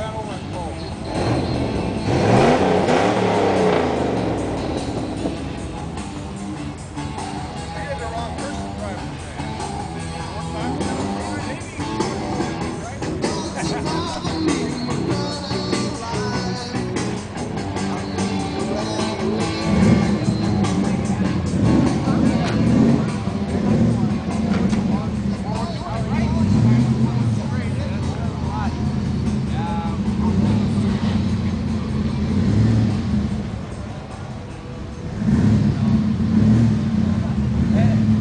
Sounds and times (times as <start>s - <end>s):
Speech: 0.0s - 1.2s, 7.6s - 14.9s, 20.8s - 30.6s, 37.1s - 38.2s
Car: 0.0s - 38.2s
Music: 0.0s - 38.2s.